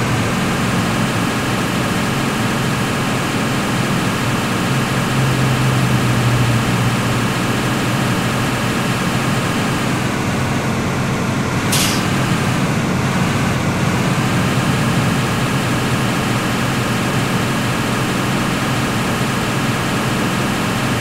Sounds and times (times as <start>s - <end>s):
Car: 0.0s - 21.0s.